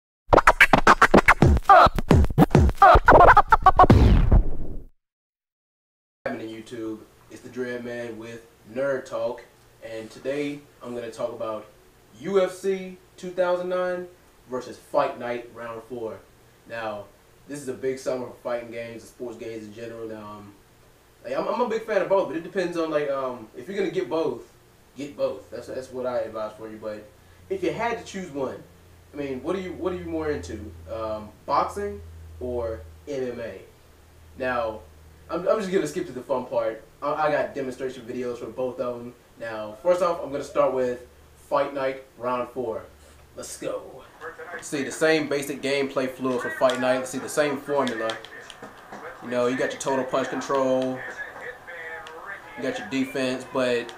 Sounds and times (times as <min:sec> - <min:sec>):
Music: 0:00.3 - 0:04.8
Speech: 0:06.3 - 0:20.6, 0:21.2 - 0:33.7, 0:34.4 - 0:53.9
Inside, small room: 0:06.3 - 0:53.9.